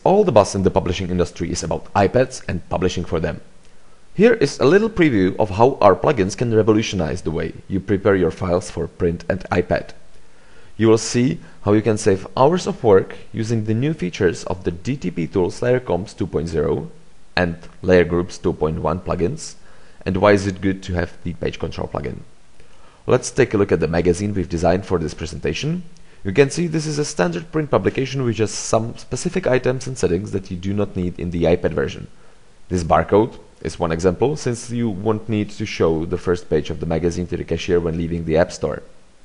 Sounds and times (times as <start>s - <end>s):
Speech: 0.0s - 3.5s, 4.2s - 10.1s, 10.8s - 22.3s, 23.1s - 32.1s, 32.7s - 38.9s.